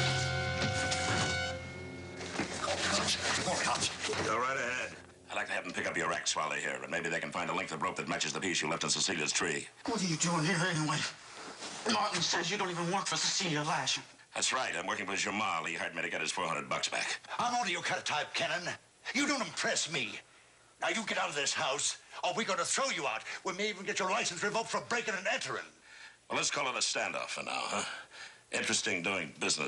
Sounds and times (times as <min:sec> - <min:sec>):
Speech: 0:02.9 - 0:11.2, 0:11.8 - 0:20.2, 0:20.8 - 0:29.6.